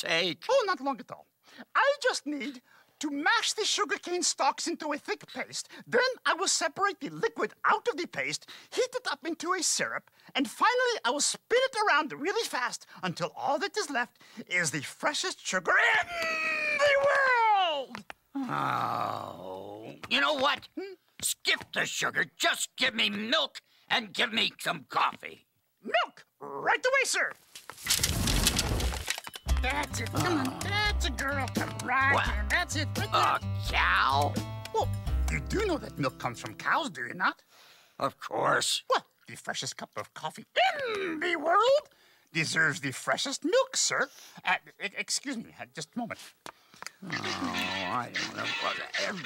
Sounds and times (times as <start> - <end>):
Speech: 0.0 - 27.4, 29.6 - 37.4, 38.0 - 46.4, 47.0 - 49.2.